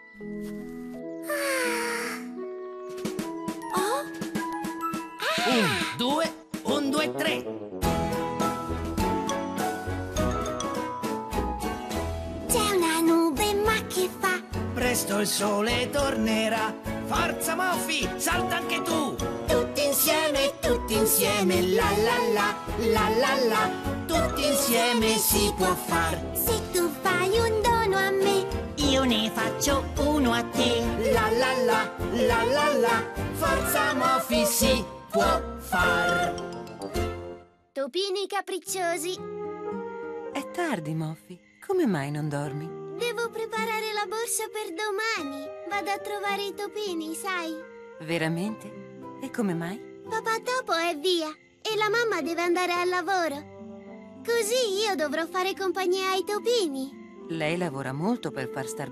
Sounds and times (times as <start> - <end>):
Music: 0.0 - 58.9.